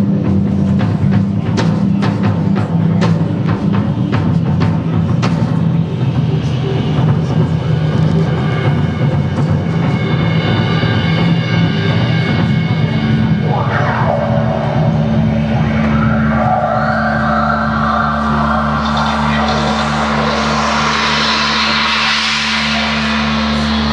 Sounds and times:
Drum: 0:00.0 - 0:23.9
Drum kit: 0:00.0 - 0:23.9
Psychedelic rock: 0:06.9 - 0:23.9.

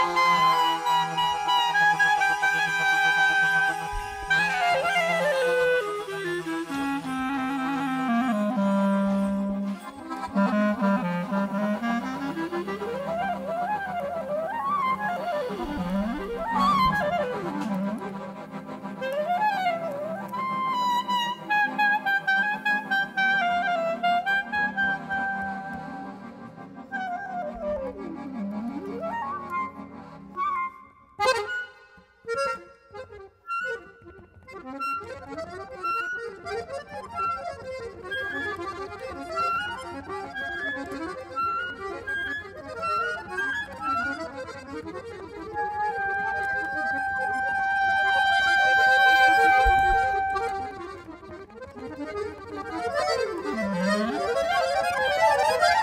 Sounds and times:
Accordion: 0:00.0 - 0:55.8
Wind instrument, woodwind instrument: 0:00.0 - 0:55.8.

